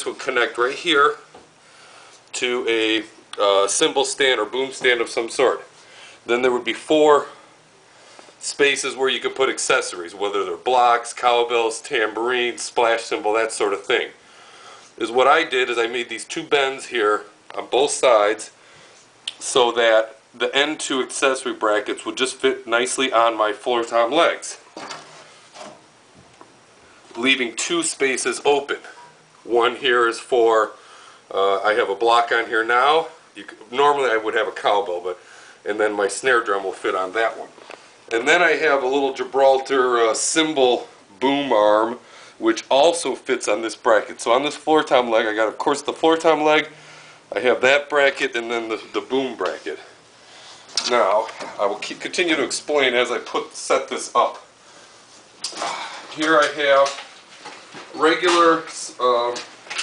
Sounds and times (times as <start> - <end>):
Speech: 0.0 - 1.4, 2.3 - 7.5, 8.4 - 14.2, 15.0 - 18.6, 19.3 - 24.7, 27.1 - 50.0, 50.8 - 54.5, 55.5 - 57.1, 57.9 - 59.5.